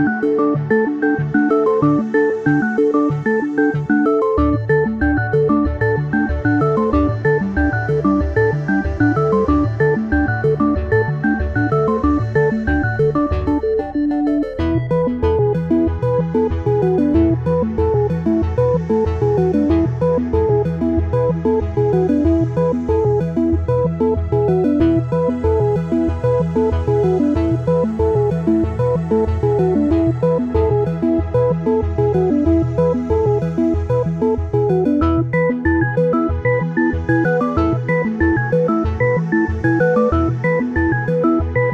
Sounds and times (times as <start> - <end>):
Music: 0.0 - 41.7.